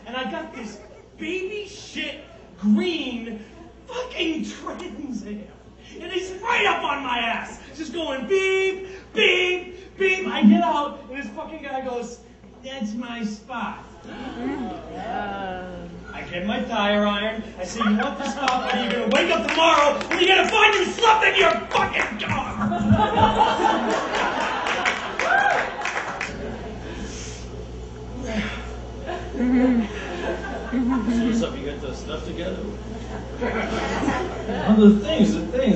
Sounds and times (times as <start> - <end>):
Narration, monologue: 0.0 - 14.1, 16.1 - 22.6.